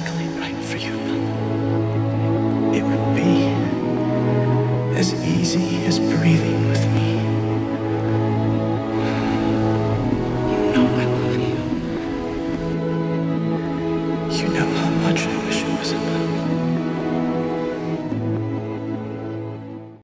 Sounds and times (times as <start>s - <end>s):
Speech: 0.0s - 1.3s, 4.9s - 7.4s, 10.5s - 11.6s, 14.3s - 16.5s
Music: 0.0s - 20.0s.